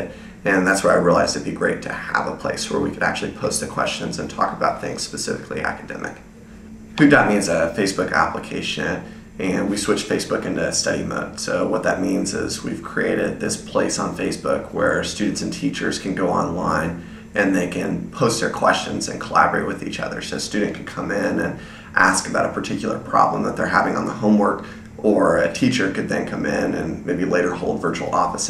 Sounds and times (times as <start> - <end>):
Speech: 0.0 - 6.3, 7.0 - 28.4.